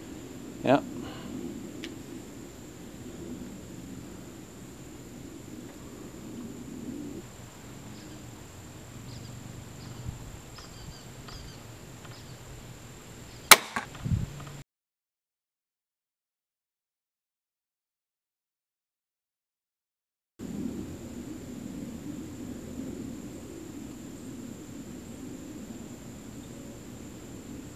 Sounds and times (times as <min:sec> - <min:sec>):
Silence: 0:00.0 - 0:13.5, 0:20.4 - 0:27.7
Outside, rural or natural: 0:00.0 - 0:14.6, 0:20.4 - 0:27.7.